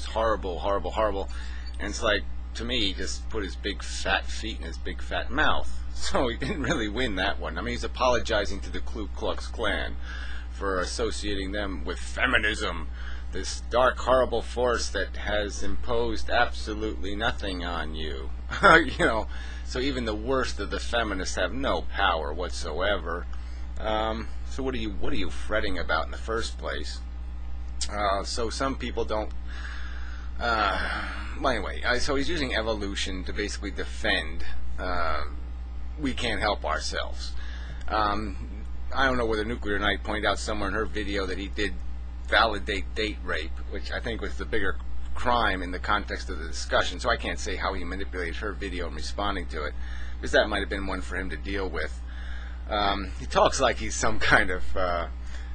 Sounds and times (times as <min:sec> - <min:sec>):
Speech: 0:00.0 - 0:27.1, 0:27.8 - 0:29.4, 0:30.4 - 0:55.2.